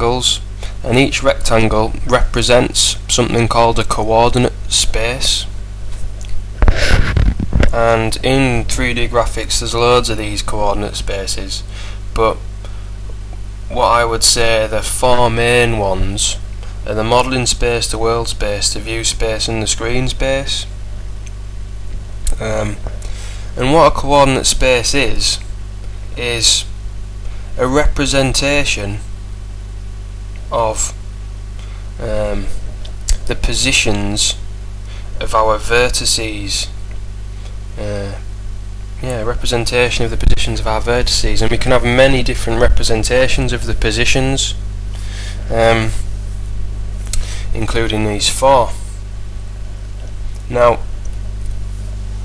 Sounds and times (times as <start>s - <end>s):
Speech: 0.0s - 5.5s, 7.7s - 12.4s, 13.7s - 20.7s, 22.3s - 22.9s, 23.6s - 25.5s, 26.2s - 26.8s, 27.6s - 29.1s, 30.5s - 31.0s, 32.0s - 34.4s, 35.2s - 36.8s, 37.8s - 38.3s, 39.0s - 44.6s, 45.5s - 46.1s, 47.5s - 48.9s, 50.4s - 50.9s.